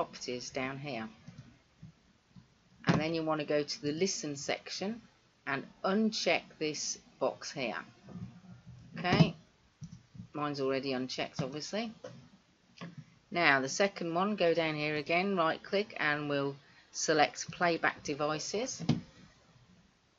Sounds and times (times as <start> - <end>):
Speech: 0.0 - 1.2, 2.9 - 7.9, 9.0 - 9.4, 10.4 - 12.0, 13.3 - 18.9.